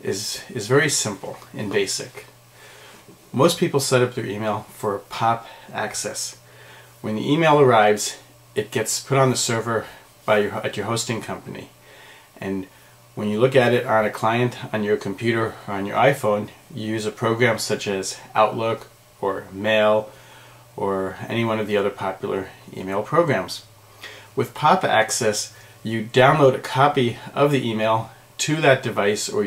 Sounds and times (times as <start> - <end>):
Speech: 0.0 - 2.4, 3.3 - 6.4, 7.0 - 11.8, 12.4 - 20.1, 20.8 - 23.7, 24.4 - 29.4.